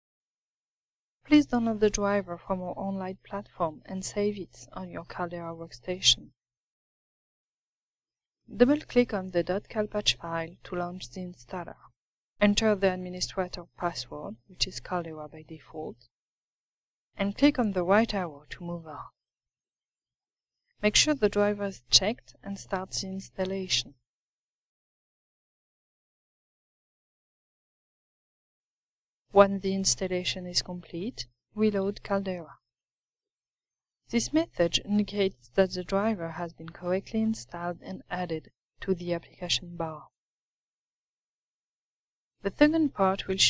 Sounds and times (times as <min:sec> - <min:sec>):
Speech: 0:01.3 - 0:06.4, 0:08.5 - 0:16.1, 0:17.2 - 0:19.2, 0:20.8 - 0:24.0, 0:29.4 - 0:32.6, 0:34.1 - 0:40.1, 0:42.4 - 0:43.4.